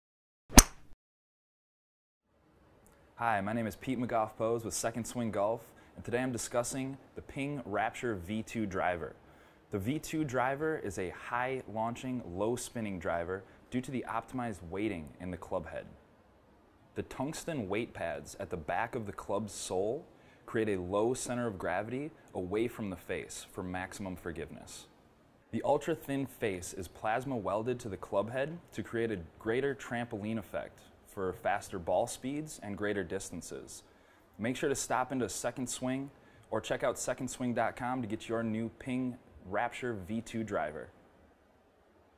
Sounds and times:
Speech: 3.2 - 16.0, 17.0 - 41.0.

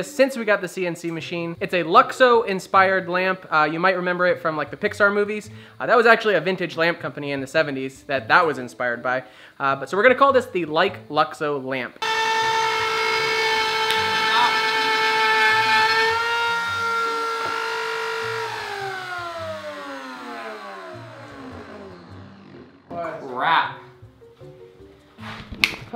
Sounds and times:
Speech: 0.0 - 12.0, 22.9 - 23.9
Music: 0.0 - 25.9.

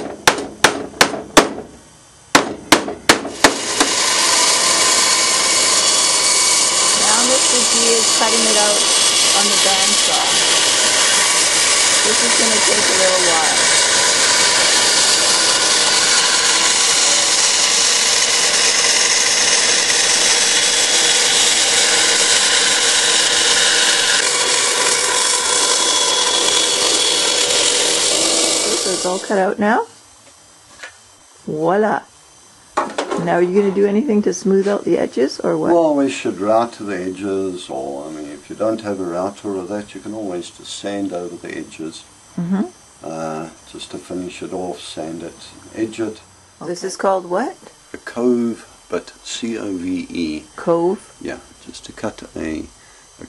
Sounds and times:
Wood: 2.4 - 29.0
Sawing: 2.4 - 29.4.

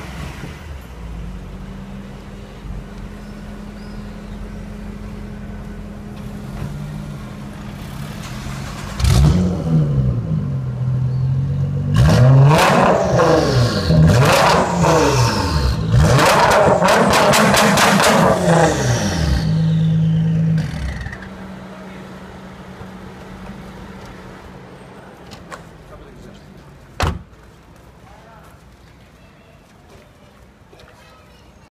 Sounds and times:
Speech: 25.8 - 26.8, 28.0 - 31.7.

